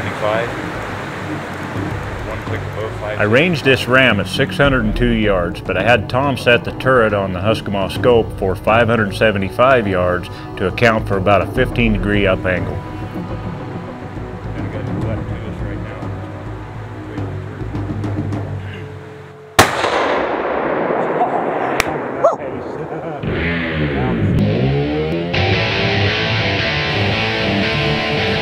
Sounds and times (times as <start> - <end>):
Gunshot, gunfire: 19.6 - 22.2.